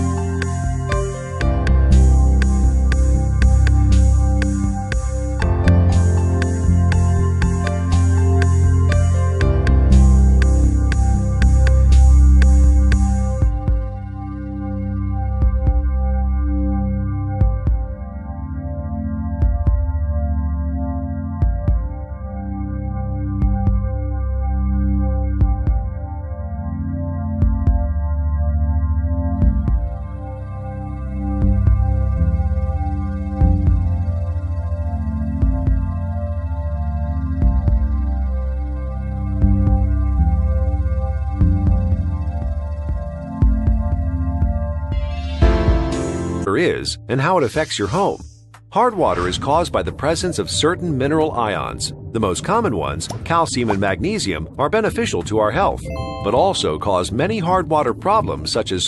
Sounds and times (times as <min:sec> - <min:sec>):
Synthesizer: 0:00.0 - 0:58.8.